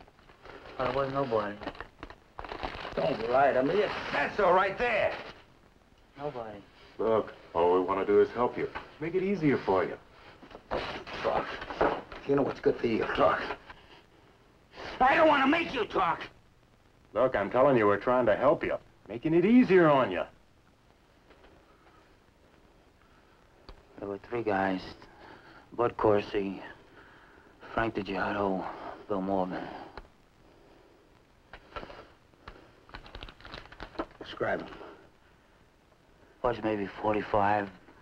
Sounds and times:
Speech: 0:24.0 - 0:25.0, 0:25.8 - 0:26.8, 0:34.2 - 0:35.0, 0:36.4 - 0:37.8.

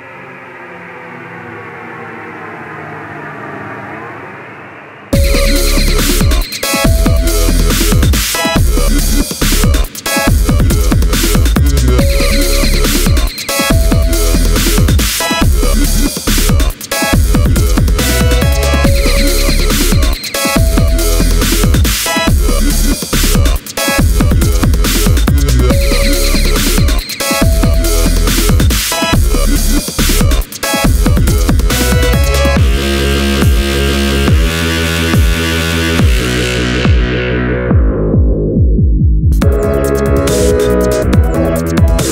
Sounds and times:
Dubstep: 0:05.2 - 0:38.0, 0:39.4 - 0:42.1.

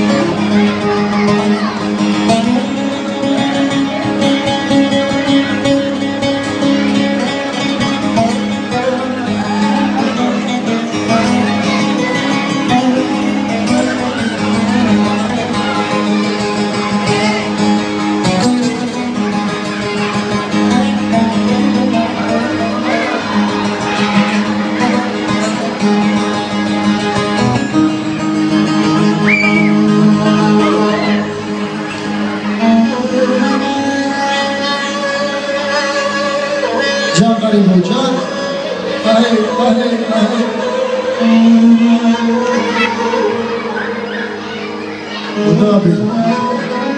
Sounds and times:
Speech: 0:00.0 - 0:17.8, 0:18.4 - 0:26.5, 0:29.0 - 0:46.9
Music: 0:00.0 - 0:46.9.

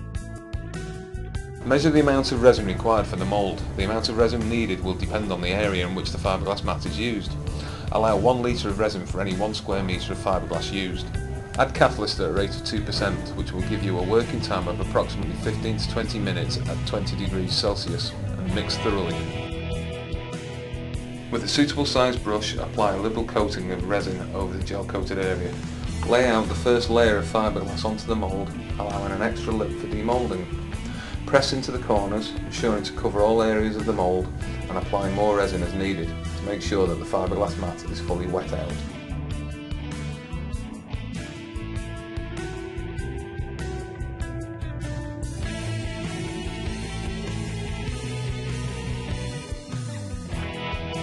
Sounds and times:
Music: 0:00.0 - 0:51.0
Speech: 0:01.6 - 0:19.4, 0:21.3 - 0:30.5, 0:31.3 - 0:38.9.

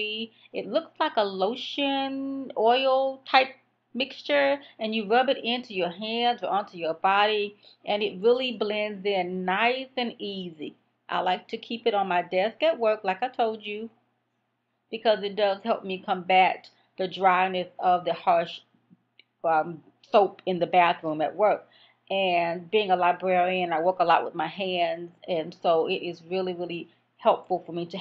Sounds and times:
Speech: 0:00.0 - 0:13.9, 0:15.0 - 0:18.6, 0:19.5 - 0:28.0.

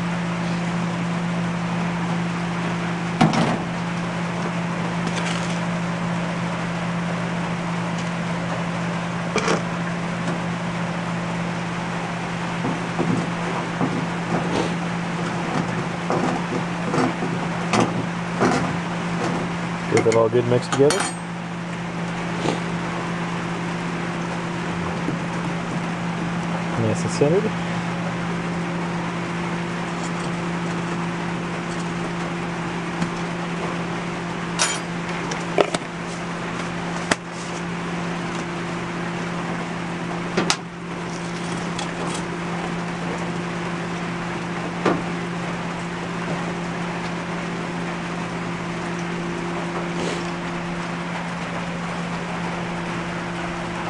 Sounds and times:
Speech: 0:19.9 - 0:21.1, 0:26.7 - 0:27.6.

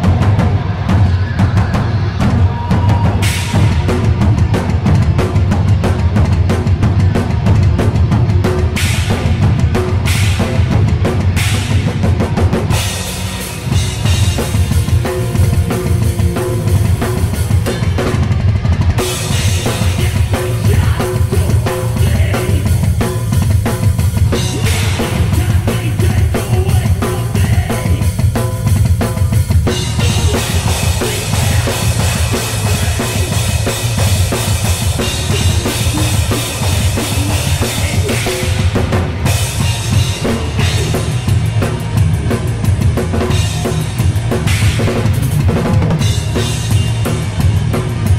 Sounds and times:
Bass drum: 0:00.0 - 0:48.1
Drum kit: 0:00.0 - 0:48.1.

